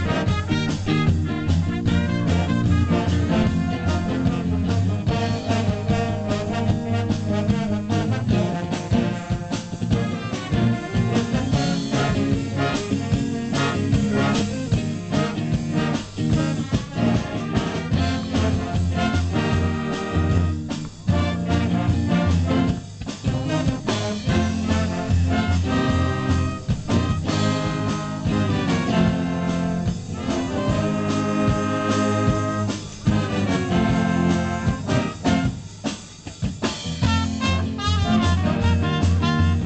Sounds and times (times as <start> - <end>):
Jazz: 0.0 - 39.6.